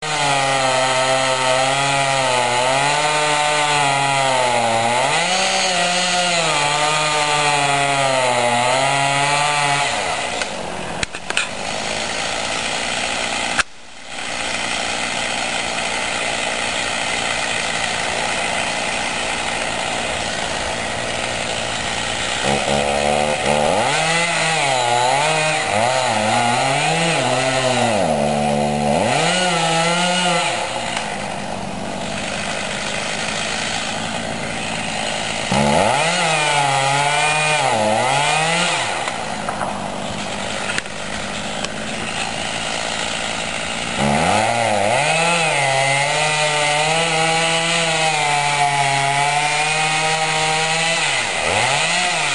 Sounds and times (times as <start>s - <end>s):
Chainsaw: 0.0s - 52.3s.